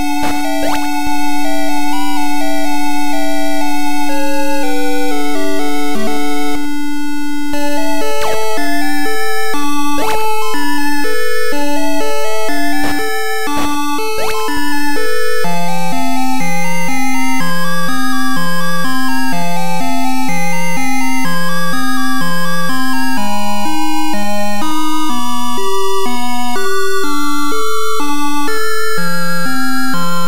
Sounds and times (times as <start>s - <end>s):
Video game music: 0.0s - 30.2s.